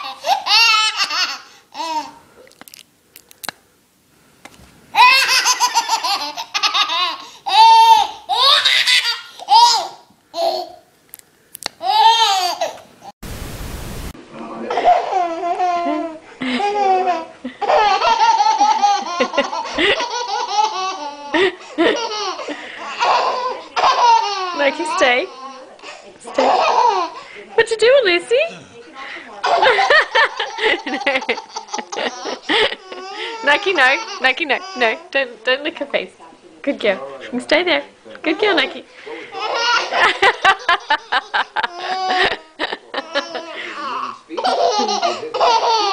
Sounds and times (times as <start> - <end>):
Laughter: 17.4 - 20.5, 21.3 - 22.8, 29.4 - 33.2, 39.6 - 45.9
Speech: 22.7 - 30.0, 41.8 - 45.9.